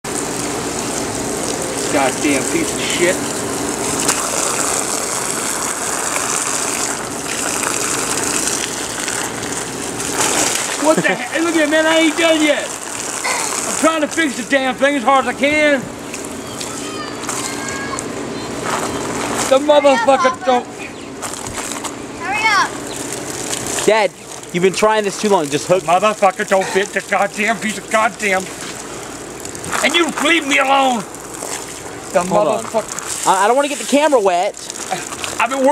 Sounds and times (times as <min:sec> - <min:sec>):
Water: 0:00.0 - 0:35.7
Water tap, faucet: 0:00.1 - 0:15.2, 0:23.0 - 0:35.7.